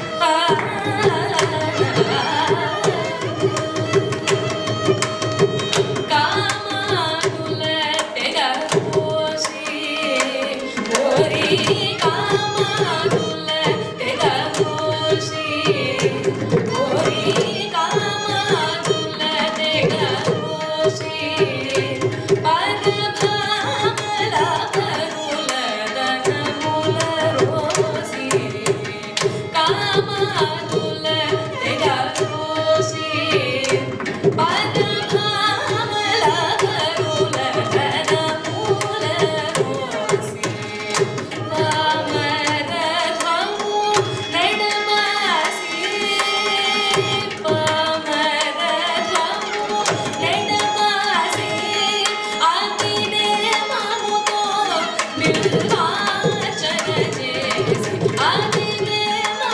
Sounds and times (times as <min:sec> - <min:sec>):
Tabla: 0:00.0 - 0:59.5.